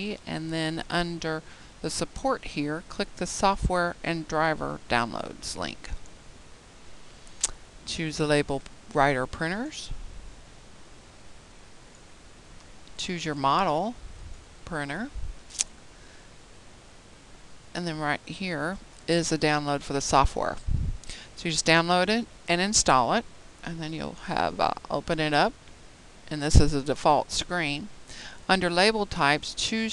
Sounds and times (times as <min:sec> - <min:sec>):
Speech: 0:00.0 - 0:06.0, 0:07.9 - 0:10.0, 0:13.0 - 0:14.0, 0:14.7 - 0:15.2, 0:17.8 - 0:20.6, 0:21.4 - 0:25.6, 0:26.3 - 0:27.9, 0:28.5 - 0:29.9.